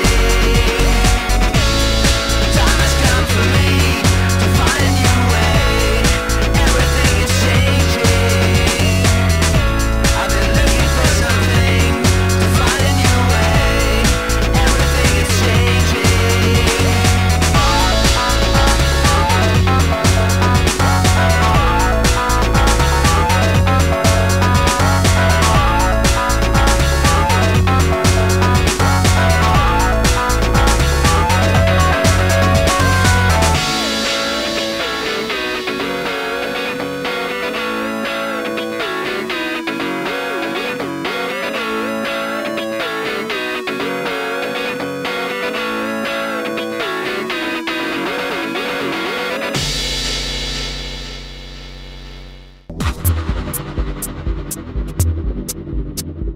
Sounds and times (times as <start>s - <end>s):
Hum: 0.0s - 36.1s, 52.7s - 56.3s.